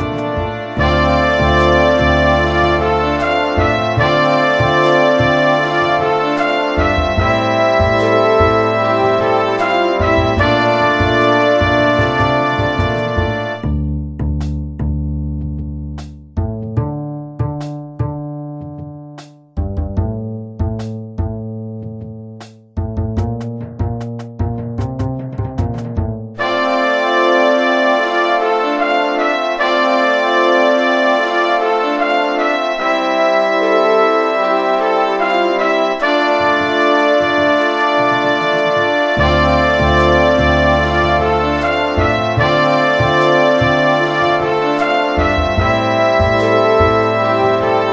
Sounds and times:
Music: 0:00.0 - 0:47.9.

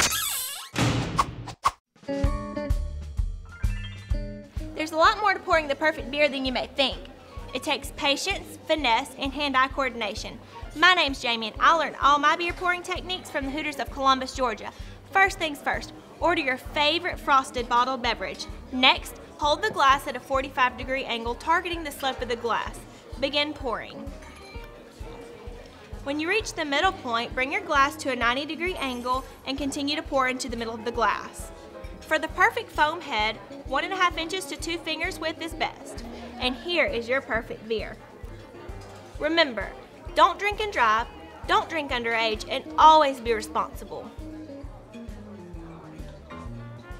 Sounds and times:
Music: 0:02.0 - 0:46.9
Speech: 0:04.8 - 0:24.0, 0:26.0 - 0:31.5, 0:32.1 - 0:38.1, 0:39.2 - 0:44.2.

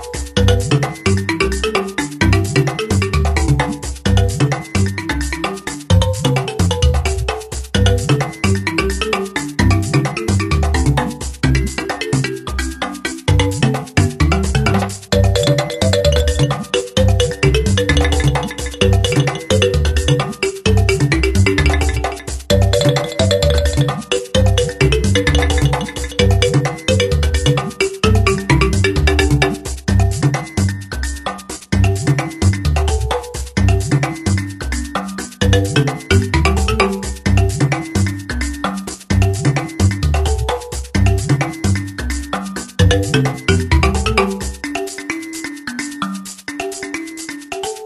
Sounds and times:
Music: 0:00.0 - 0:47.8.

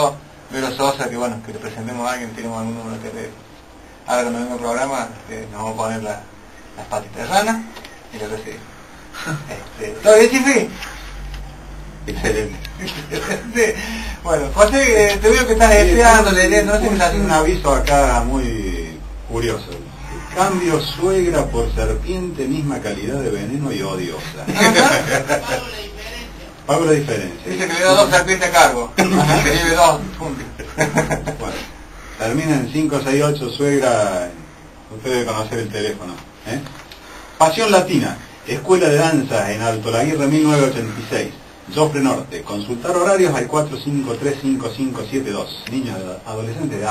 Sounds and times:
Speech: 0:14.2 - 0:30.6, 0:37.4 - 0:46.9.

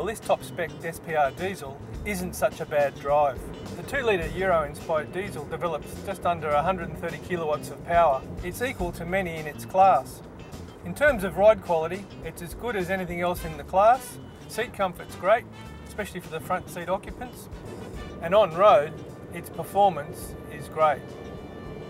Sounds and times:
Speech: 0:00.0 - 0:10.2, 0:10.8 - 0:17.5, 0:18.2 - 0:21.0
Car: 0:00.0 - 0:21.8.

